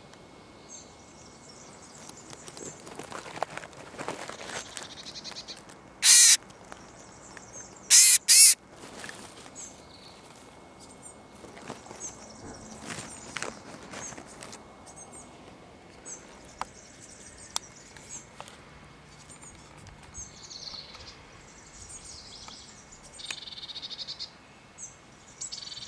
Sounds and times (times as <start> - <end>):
Animal: 2.0 - 6.4, 7.9 - 8.6.